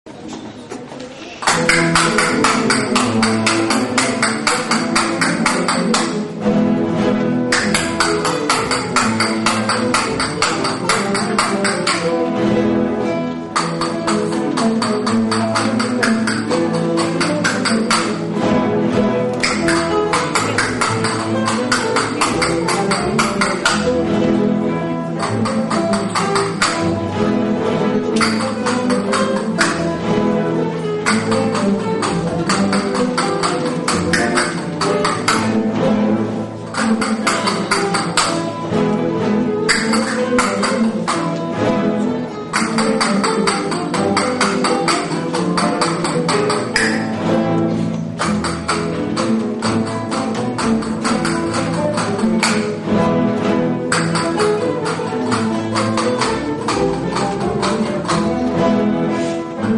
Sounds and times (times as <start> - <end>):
Classical music: 0.1 - 59.7
Flamenco: 0.1 - 59.7
Orchestra: 0.1 - 59.7
Guitar: 1.5 - 59.7.